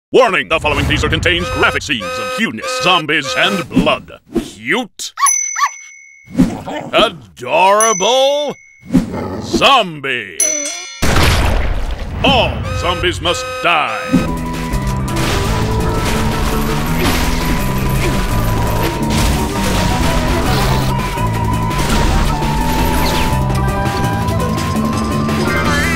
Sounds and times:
Speech: 0.1 - 5.2, 6.9 - 8.6, 9.4 - 10.4, 12.2 - 14.1.

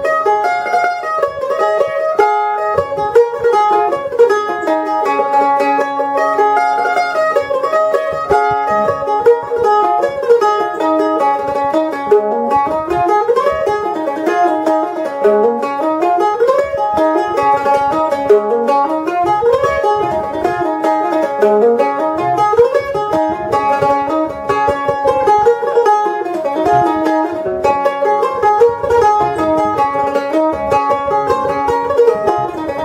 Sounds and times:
Banjo: 0.0 - 32.8
Mandolin: 0.0 - 32.8.

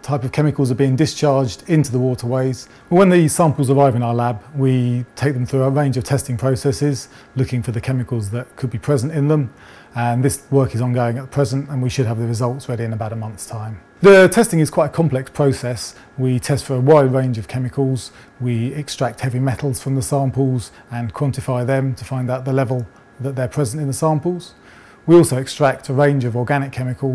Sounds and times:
Speech: 0.0 - 27.1.

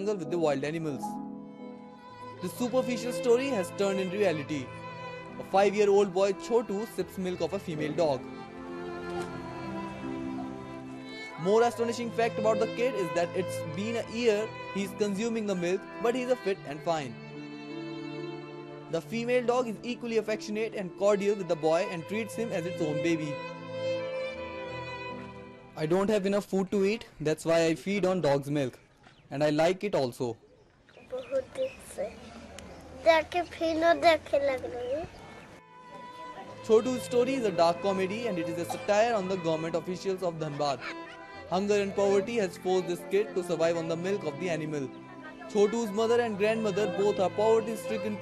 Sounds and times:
Music: 0.0 - 26.9, 35.6 - 48.2.

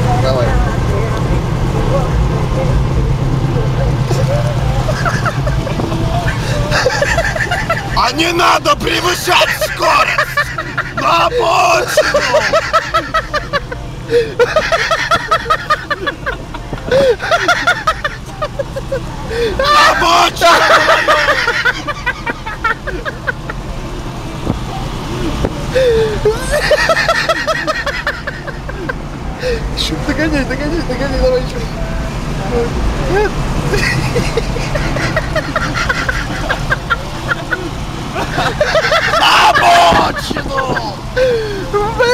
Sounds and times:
Car: 0.0 - 42.1.

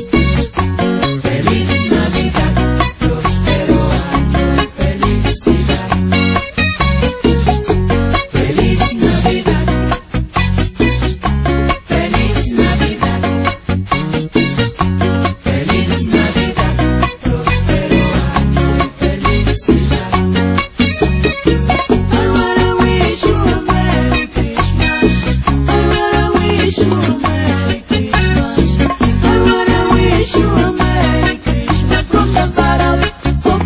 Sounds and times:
Christmas music: 0.0 - 33.6.

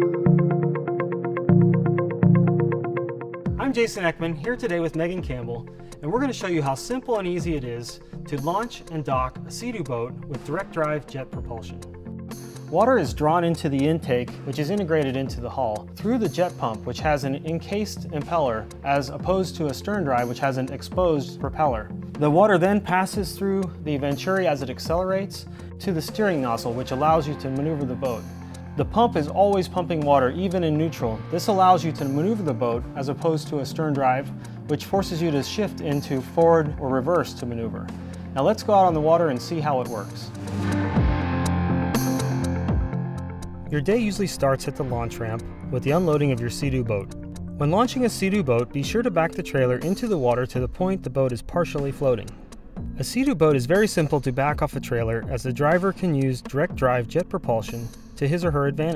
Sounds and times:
Music: 0.0 - 58.9
Speech: 3.6 - 11.8, 12.7 - 40.3, 43.7 - 52.3, 53.0 - 58.9.

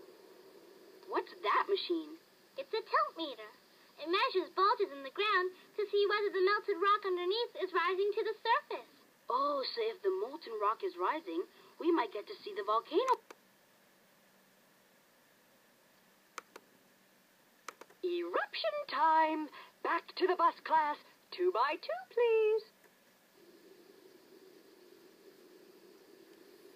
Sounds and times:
Speech: 1.1 - 13.2, 18.0 - 22.7.

